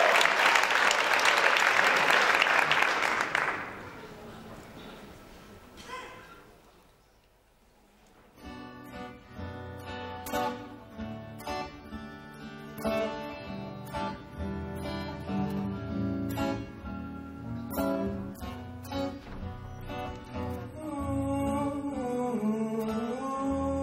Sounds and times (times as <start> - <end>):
Music: 8.3 - 23.8
Male singing: 20.6 - 23.8.